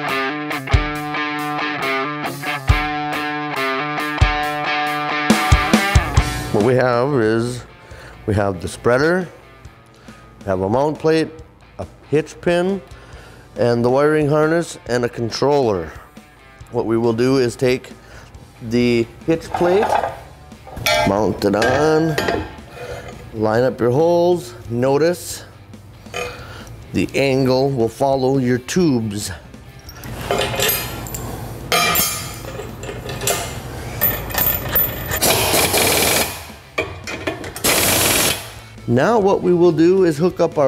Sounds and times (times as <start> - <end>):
Speech: 6.5 - 7.7, 10.4 - 12.8, 13.6 - 16.0, 16.7 - 17.9, 18.6 - 19.9, 21.1 - 22.3, 23.4 - 25.5, 26.9 - 29.4, 38.9 - 40.6.